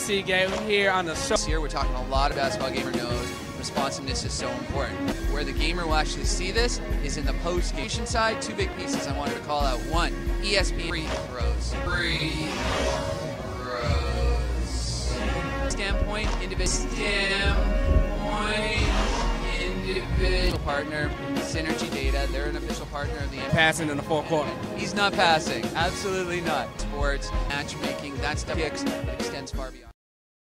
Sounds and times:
Speech: 0.0s - 12.5s, 13.6s - 17.6s, 18.2s - 30.0s
Music: 0.0s - 30.0s.

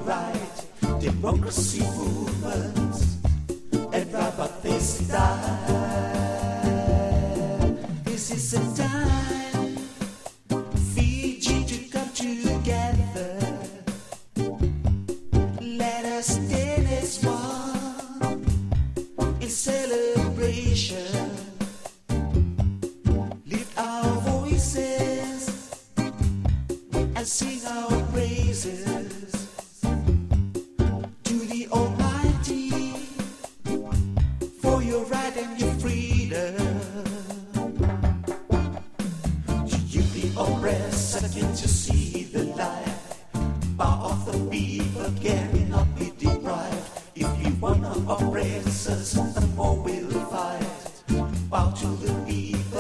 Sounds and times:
Jingle (music): 0.0s - 52.8s.

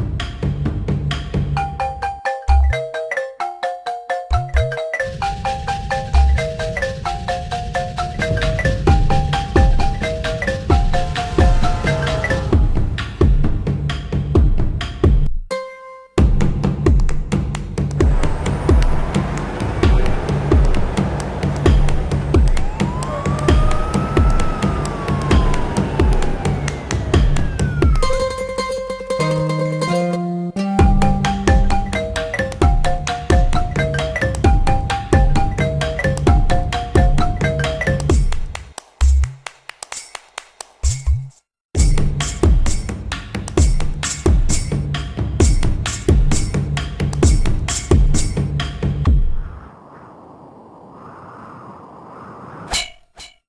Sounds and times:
Music: 0.0s - 49.4s.

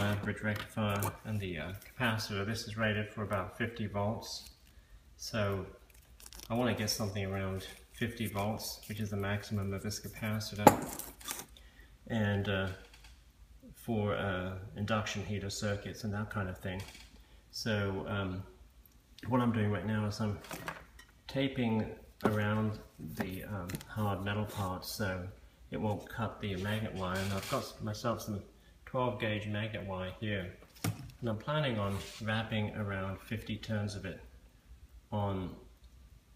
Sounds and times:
Speech: 0.0s - 4.5s, 5.2s - 5.8s, 6.5s - 10.8s, 12.1s - 12.9s, 13.6s - 18.6s, 19.2s - 20.5s, 21.3s - 30.6s, 31.2s - 34.3s, 35.1s - 35.7s.

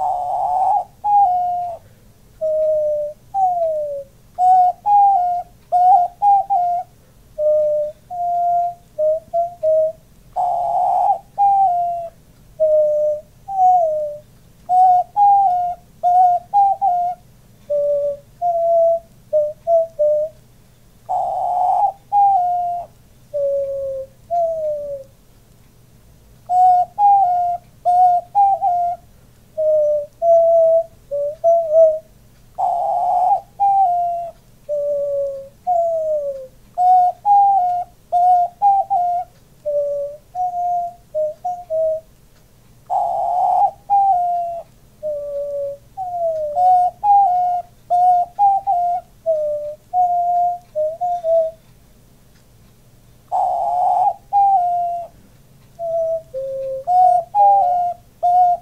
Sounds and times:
Coo: 0.0s - 1.8s, 2.4s - 20.3s, 21.1s - 25.0s, 26.5s - 29.0s, 29.6s - 32.0s, 32.6s - 42.0s, 42.9s - 51.6s, 53.3s - 55.1s, 55.8s - 58.6s
Bird vocalization, bird call, bird song: 0.0s - 25.1s, 26.4s - 42.1s, 42.8s - 51.7s, 53.3s - 58.6s.

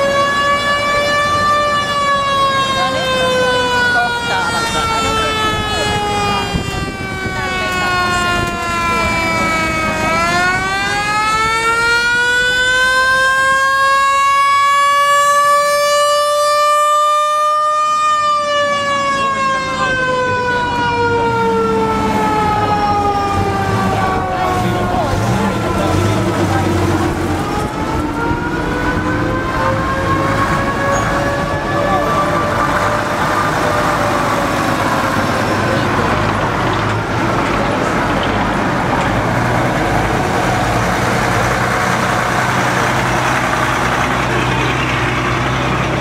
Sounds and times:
Vehicle: 0.0s - 46.0s
Speech: 2.6s - 9.7s, 23.8s - 27.2s, 31.6s - 32.6s.

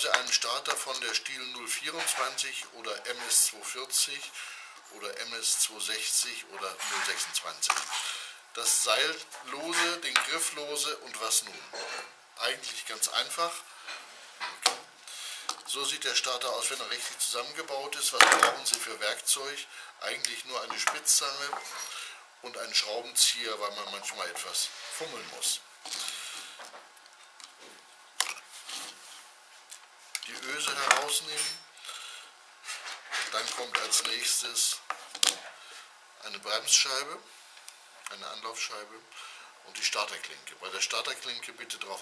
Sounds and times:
Speech: 0.0s - 4.3s, 4.9s - 7.8s, 8.6s - 13.6s, 15.7s - 21.7s, 22.4s - 25.6s, 30.2s - 31.6s, 33.2s - 34.9s, 36.2s - 37.3s, 38.1s - 42.0s.

